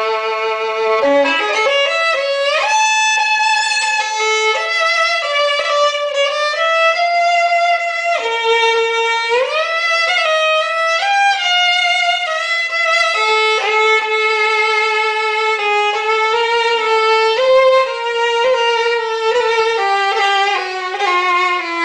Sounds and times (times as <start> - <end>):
Violin, fiddle: 0.0 - 21.8.